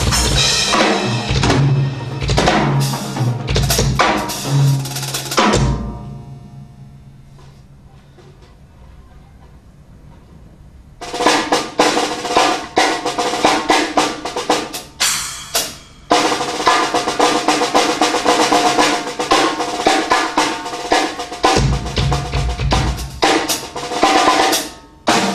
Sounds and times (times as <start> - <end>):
Bass drum: 0.0 - 6.1, 21.6 - 23.4
Drum kit: 0.0 - 7.6, 11.0 - 25.3.